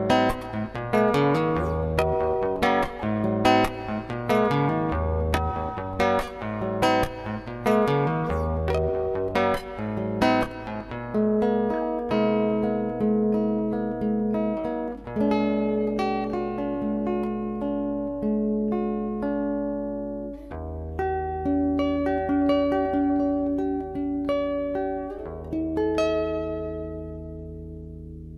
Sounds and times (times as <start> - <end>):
Electronic tuner: 0.0 - 28.3
Guitar: 0.0 - 28.3
Inside, small room: 0.0 - 28.3.